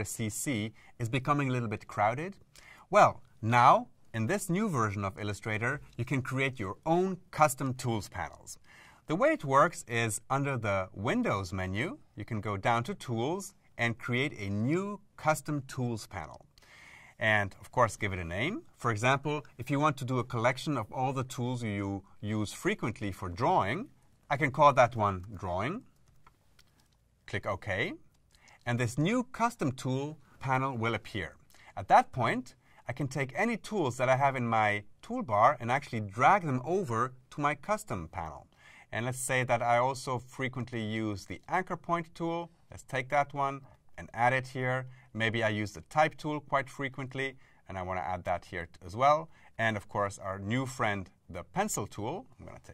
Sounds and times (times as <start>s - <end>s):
Speech: 0.0s - 16.5s, 17.2s - 26.0s, 27.3s - 52.7s.